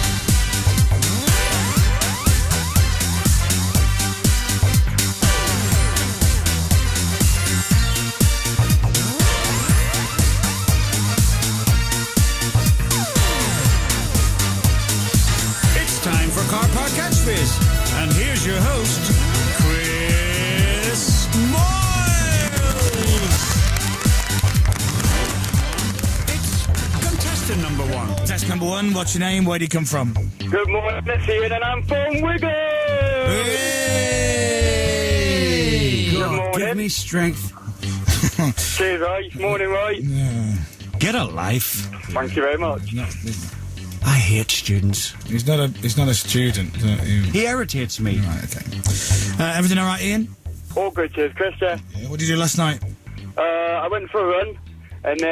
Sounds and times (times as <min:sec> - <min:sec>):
Music: 0:00.0 - 0:55.3
Speech: 0:15.7 - 0:23.4, 0:27.0 - 0:37.5, 0:38.6 - 0:43.4, 0:44.0 - 0:48.8, 0:49.4 - 0:52.8, 0:53.4 - 0:55.3.